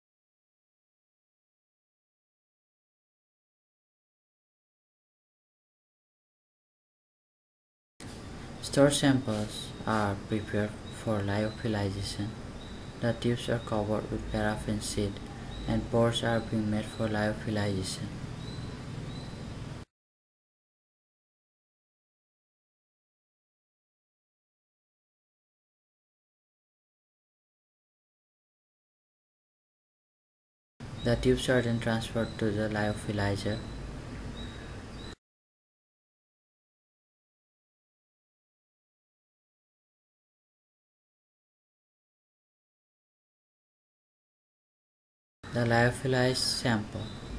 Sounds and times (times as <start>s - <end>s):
Speech: 8.6s - 12.4s, 13.0s - 18.2s, 31.0s - 33.7s, 45.5s - 47.2s.